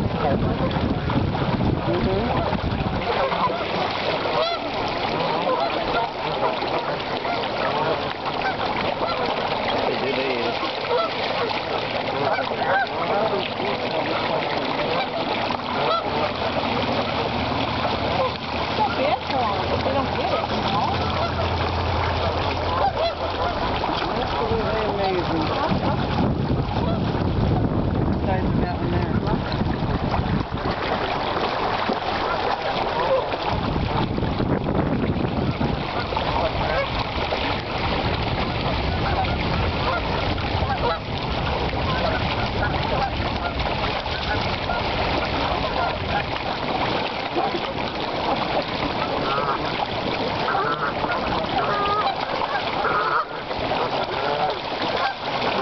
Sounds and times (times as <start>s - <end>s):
Splash, splatter: 0.0s - 55.6s
Duck: 2.3s - 9.3s, 10.3s - 11.5s, 12.2s - 13.1s, 14.0s - 16.4s, 20.2s - 21.5s, 22.7s - 23.6s, 38.9s - 41.0s, 49.0s - 49.8s, 50.5s - 55.6s.